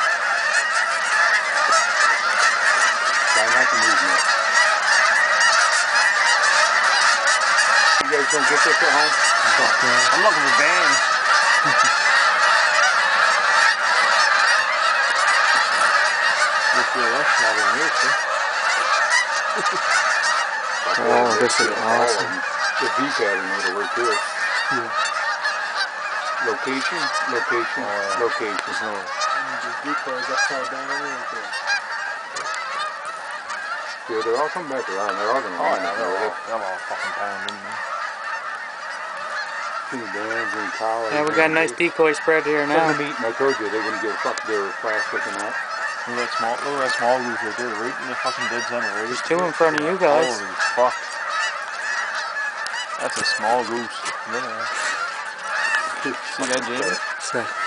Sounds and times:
Honk: 0.0s - 57.6s
Speech: 8.0s - 11.0s, 20.9s - 24.9s, 26.5s - 31.5s, 34.1s - 37.8s, 39.9s - 50.9s, 53.0s - 55.0s, 56.0s - 57.5s.

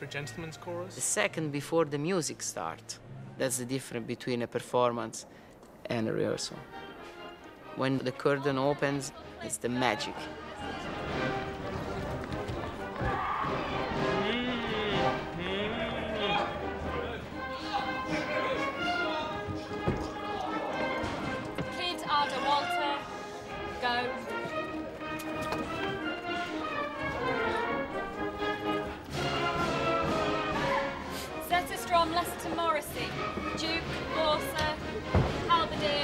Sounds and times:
Opera: 7.9s - 36.0s.

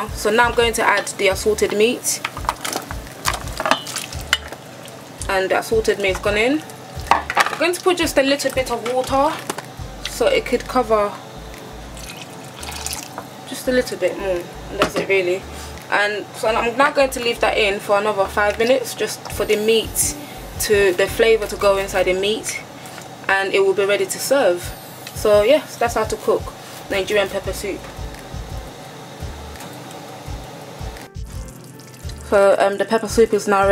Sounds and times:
Water: 12.0s - 13.2s, 31.5s - 32.8s.

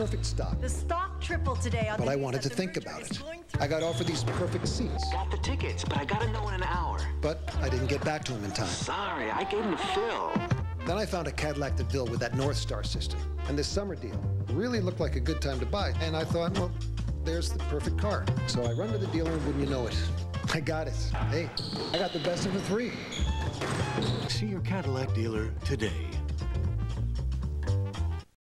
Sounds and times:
Music: 0.0s - 28.4s.

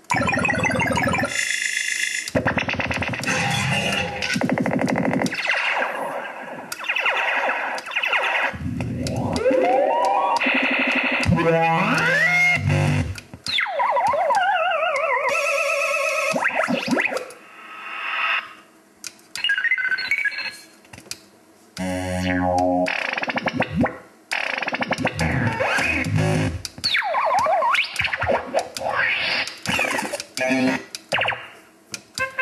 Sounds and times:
Sound effect: 0.1s - 18.6s, 21.8s - 31.6s
Music: 2.4s - 5.4s, 8.8s - 17.1s, 24.8s - 30.8s, 32.2s - 32.4s.

